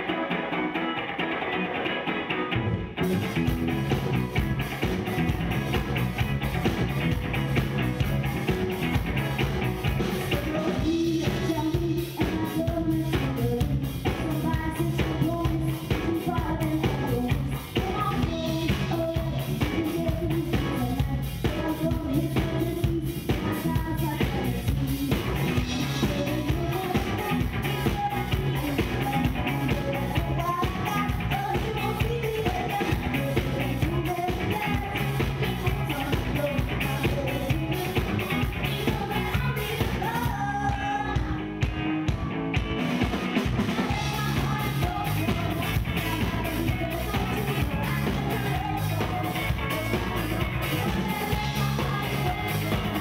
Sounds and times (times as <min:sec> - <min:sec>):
Music: 0:00.0 - 0:53.0.